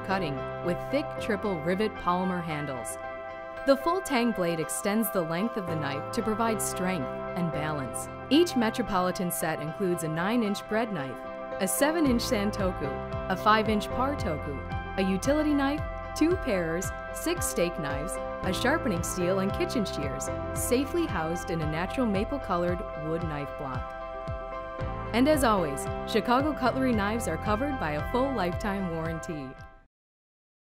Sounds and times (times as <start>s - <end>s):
Speech: 0.0s - 3.0s, 3.7s - 23.8s, 25.2s - 29.6s
Music: 0.0s - 29.9s.